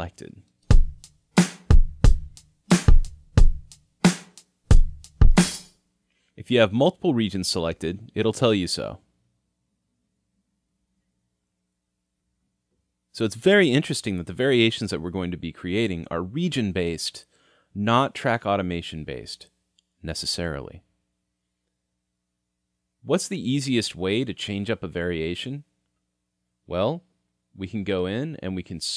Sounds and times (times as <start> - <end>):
Speech: 0.0 - 0.5, 6.4 - 9.1, 13.1 - 20.9, 23.0 - 25.7, 26.7 - 28.9
Drum: 0.7 - 5.7
Drum kit: 0.7 - 5.7.